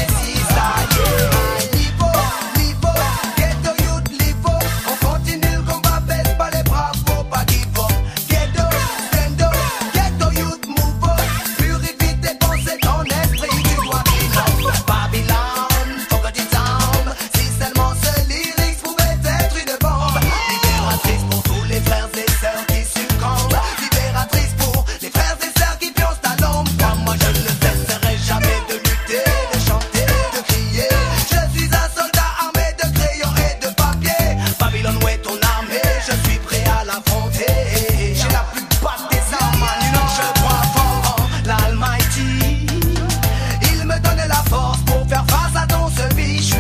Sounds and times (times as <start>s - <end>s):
Afrobeat: 0.0s - 46.6s
Reggae: 0.0s - 46.6s.